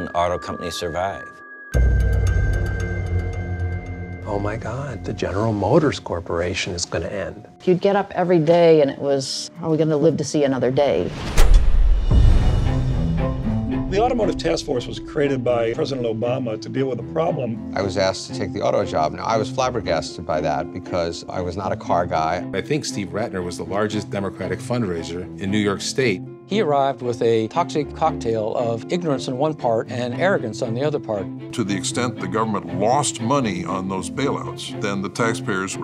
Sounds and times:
Speech: 0:00.0 - 0:01.3, 0:13.9 - 0:35.8
Music: 0:00.0 - 0:35.8.

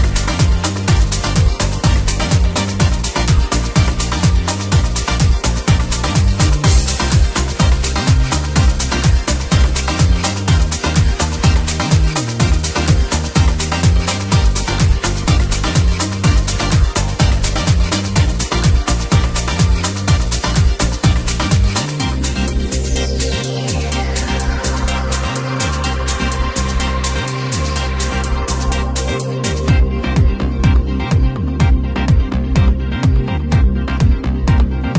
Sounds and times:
Trance music: 0:00.0 - 0:34.9.

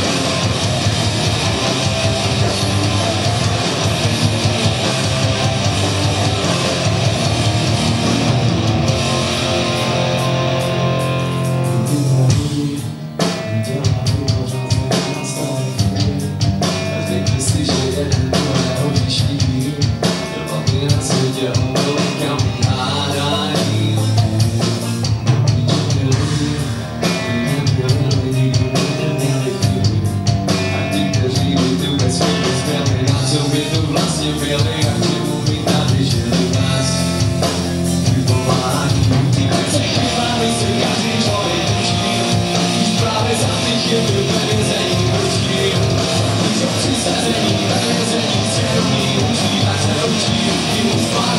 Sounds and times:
Music: 0:00.0 - 0:51.3.

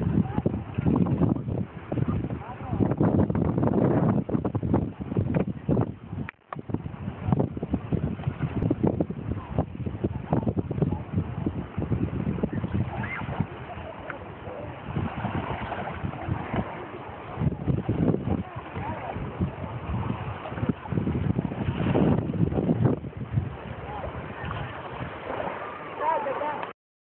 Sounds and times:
Wind noise (microphone): 0:00.0 - 0:25.6.

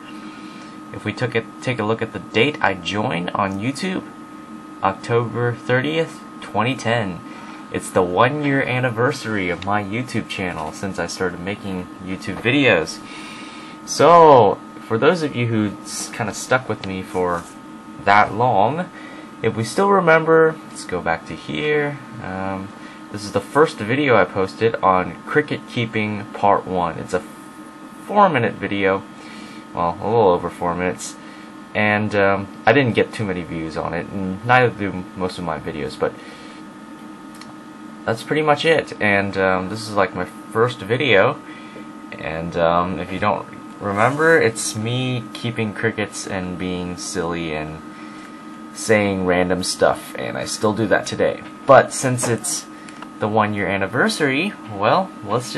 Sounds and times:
Speech: 0:00.9 - 0:04.2, 0:04.8 - 0:13.1, 0:13.8 - 0:27.3, 0:28.1 - 0:29.1, 0:29.7 - 0:36.3, 0:38.0 - 0:41.5, 0:42.1 - 0:47.9, 0:48.7 - 0:55.5.

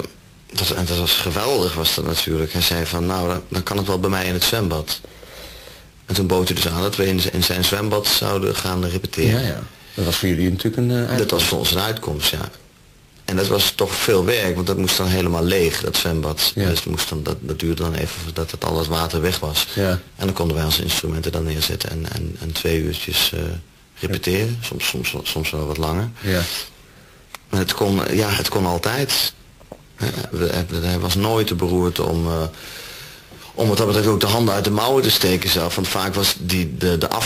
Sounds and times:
Speech: 0:00.0 - 0:05.0, 0:06.1 - 0:12.6, 0:13.3 - 0:26.7, 0:27.5 - 0:29.4, 0:30.0 - 0:32.6, 0:33.4 - 0:37.2.

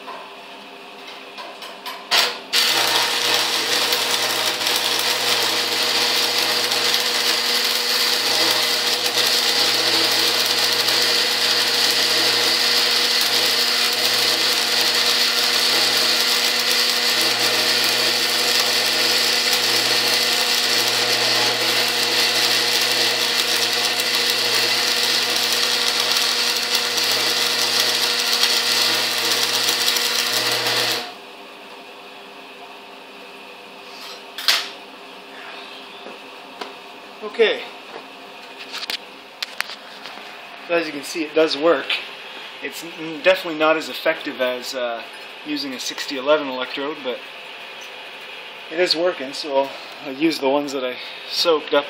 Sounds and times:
Power tool: 0:02.1 - 0:31.2.

